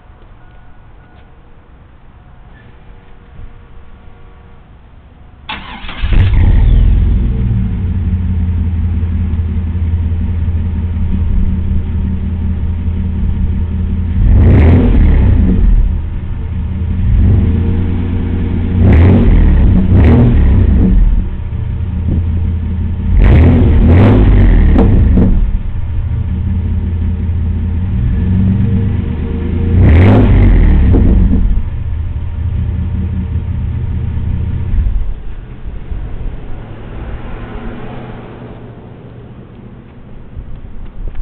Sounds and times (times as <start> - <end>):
Outside, urban or manmade: 0.0 - 41.2.